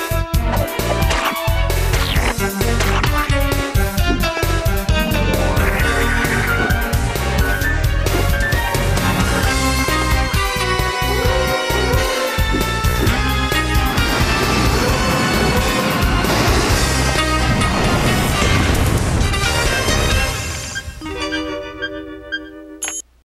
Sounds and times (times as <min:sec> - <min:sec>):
Music: 0:00.0 - 0:23.1.